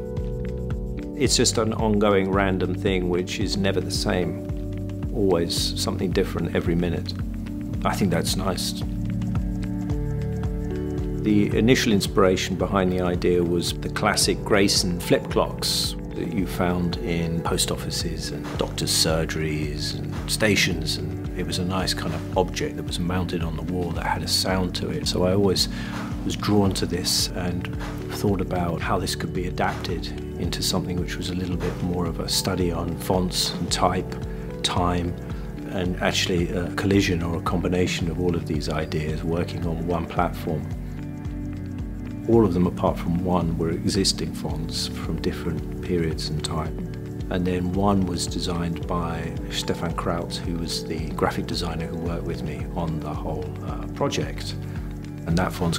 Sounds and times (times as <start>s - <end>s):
Music: 0.0s - 55.7s
Speech: 1.2s - 9.0s, 11.2s - 40.8s, 42.2s - 54.6s, 55.2s - 55.7s.